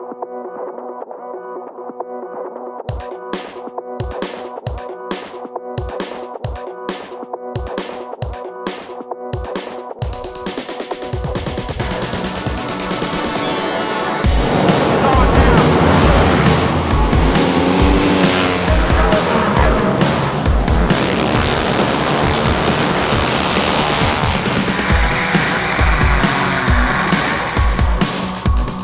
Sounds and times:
Music: 0:00.0 - 0:28.8
Speech: 0:14.5 - 0:16.6, 0:18.5 - 0:20.1.

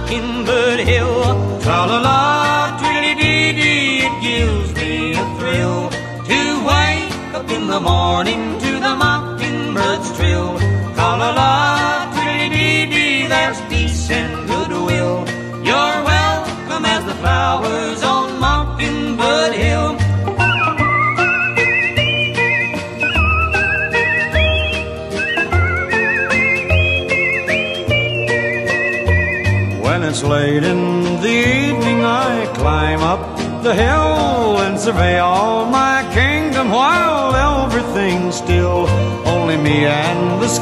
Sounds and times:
Funny music: 0:00.0 - 0:40.6.

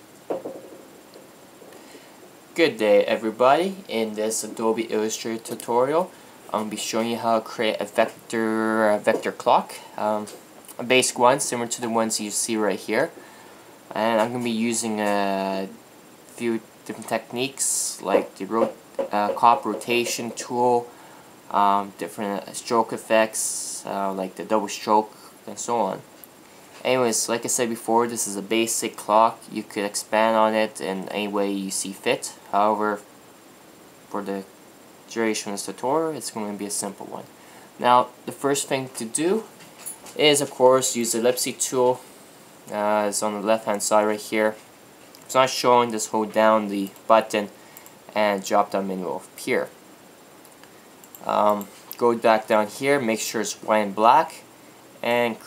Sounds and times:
Speech: 0:02.6 - 0:13.2, 0:13.9 - 0:15.8, 0:16.4 - 0:20.9, 0:21.5 - 0:26.1, 0:26.8 - 0:33.0, 0:34.1 - 0:34.5, 0:35.1 - 0:39.5, 0:40.1 - 0:42.0, 0:42.7 - 0:44.6, 0:45.3 - 0:49.8, 0:51.2 - 0:55.4.

